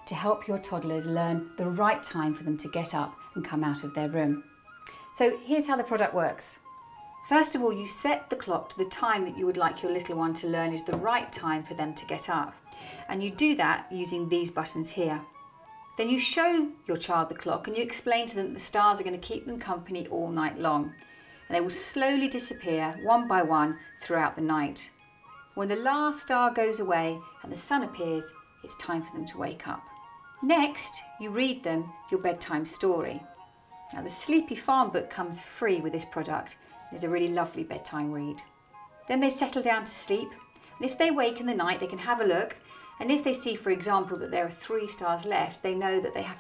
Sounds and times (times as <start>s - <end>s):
Music: 0.0s - 46.4s
Speech: 0.1s - 4.4s, 5.2s - 6.6s, 7.3s - 15.3s, 16.0s - 24.9s, 25.6s - 29.8s, 30.4s - 33.2s, 33.9s - 38.5s, 39.1s - 46.4s.